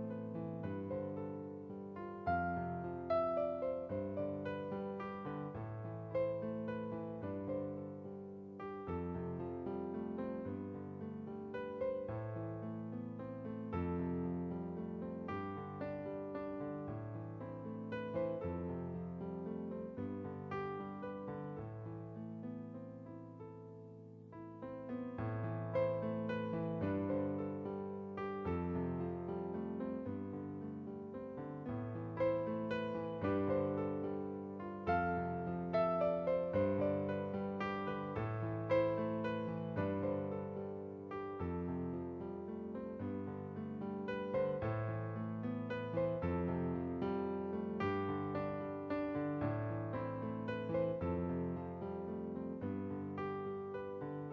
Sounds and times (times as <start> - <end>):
Music: 0.0 - 54.3.